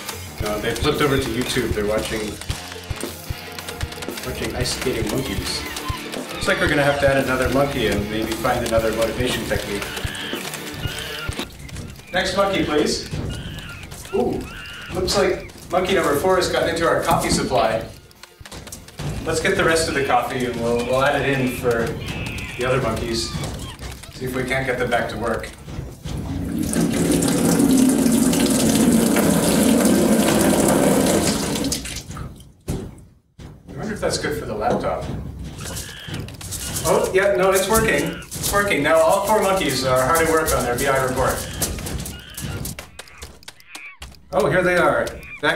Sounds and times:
Speech: 0.4 - 2.4, 4.2 - 5.7, 6.4 - 9.9, 12.1 - 13.1, 14.1 - 17.9, 19.3 - 23.4, 24.2 - 25.6, 33.7 - 35.1, 36.8 - 41.6, 44.3 - 45.5
Fill (with liquid): 26.5 - 32.1.

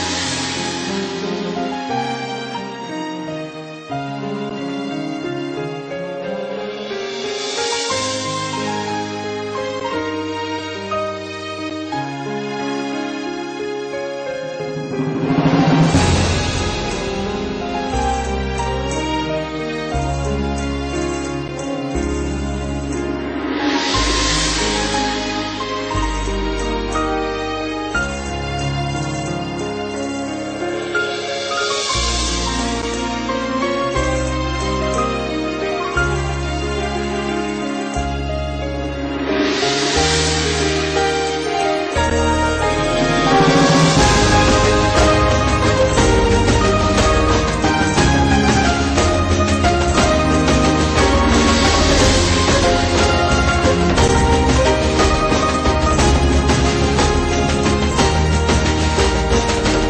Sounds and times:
Background music: 0.0 - 59.9.

